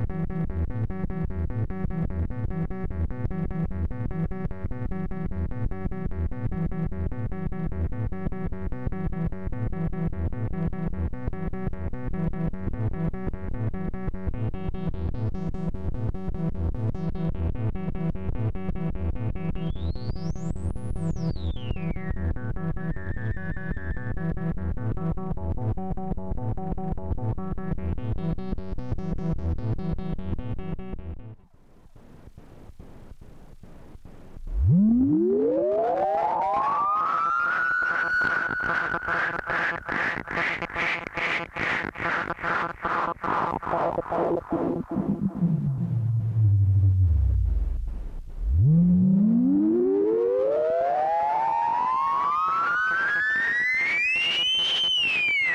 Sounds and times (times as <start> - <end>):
Synthesizer: 0.0 - 55.5.